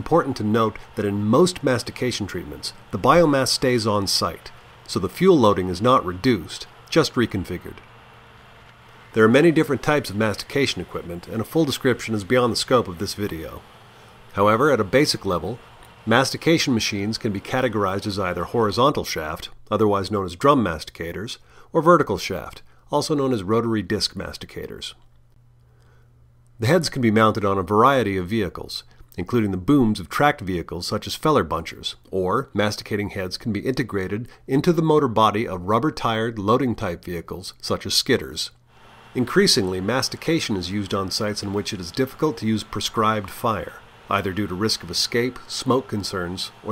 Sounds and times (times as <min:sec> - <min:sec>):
Speech: 0:00.0 - 0:07.8, 0:09.1 - 0:13.7, 0:14.3 - 0:25.1, 0:26.6 - 0:46.7.